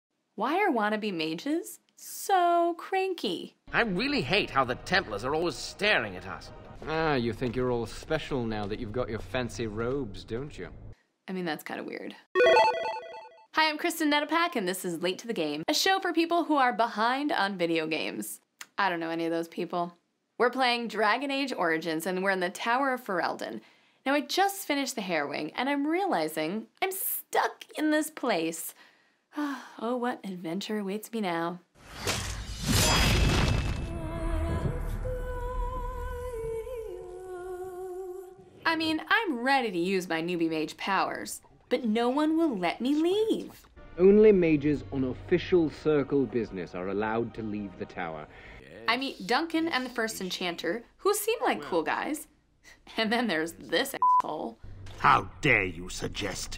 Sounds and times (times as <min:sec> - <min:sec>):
Music: 0:03.7 - 0:10.9, 0:12.4 - 0:13.2, 0:33.9 - 0:37.3, 0:43.7 - 0:48.6.